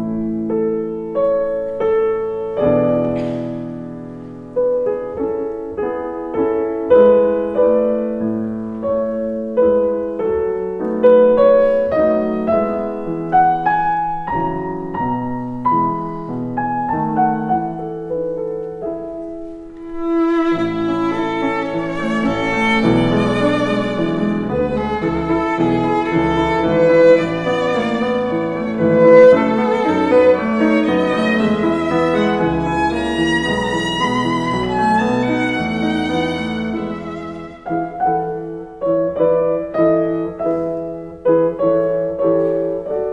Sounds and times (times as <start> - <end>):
Violin, fiddle: 19.8 - 38.5.